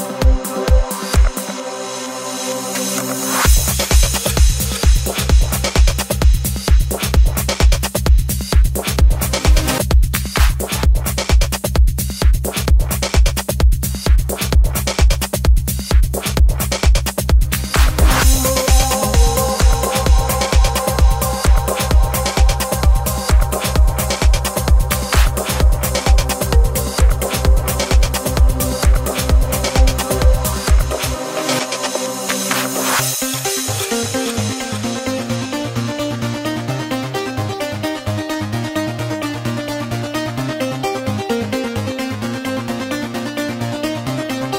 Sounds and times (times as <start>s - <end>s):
Music: 0.0s - 44.5s.